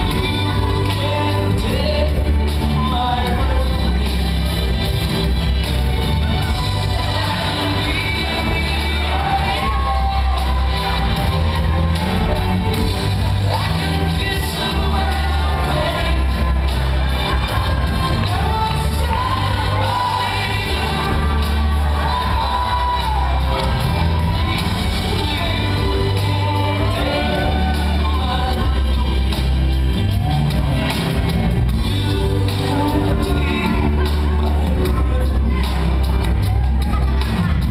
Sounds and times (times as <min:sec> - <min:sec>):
Music: 0:00.0 - 0:37.7.